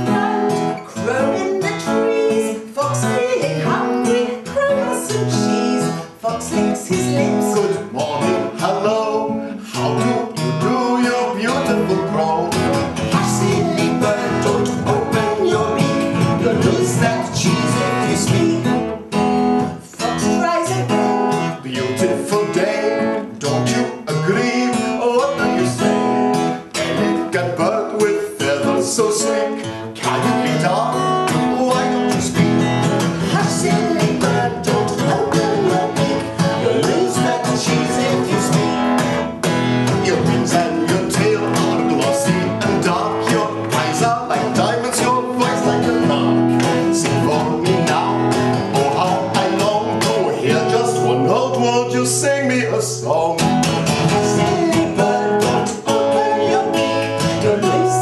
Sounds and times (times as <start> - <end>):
Music: 0.0 - 58.0.